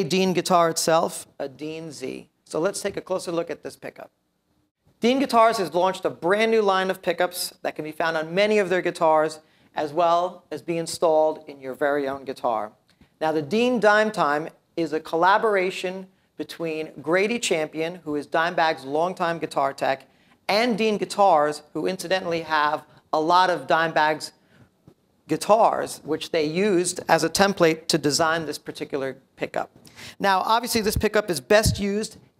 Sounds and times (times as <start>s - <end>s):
Speech: 0.0s - 4.2s, 5.0s - 24.4s, 25.3s - 32.3s.